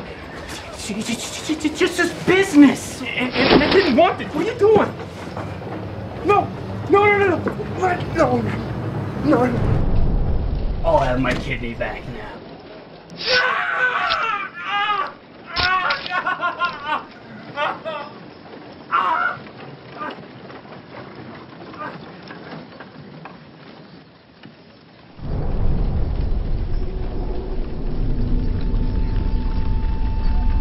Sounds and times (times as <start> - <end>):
Speech: 0.5 - 4.9, 6.2 - 8.6, 9.2 - 9.7, 10.8 - 12.4.